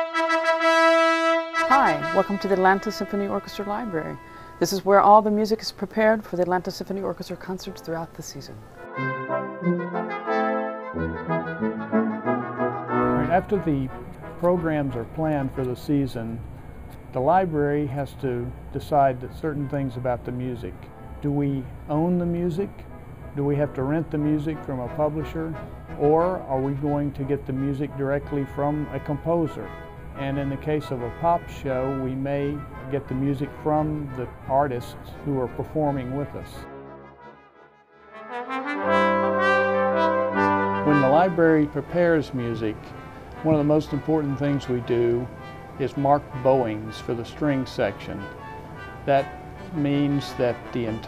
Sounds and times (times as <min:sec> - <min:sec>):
Orchestra: 0:00.0 - 0:04.6, 0:08.6 - 0:15.8, 0:20.9 - 0:51.0
Speech: 0:01.7 - 0:08.6, 0:13.2 - 0:16.4, 0:17.1 - 0:22.8, 0:23.4 - 0:36.6, 0:40.9 - 0:42.8, 0:43.4 - 0:48.3, 0:49.1 - 0:51.0.